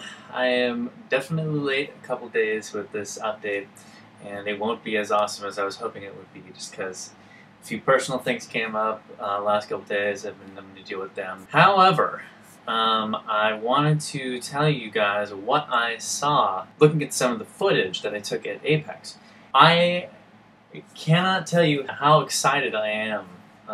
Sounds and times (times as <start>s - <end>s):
Speech: 0.0s - 20.1s, 20.8s - 23.7s.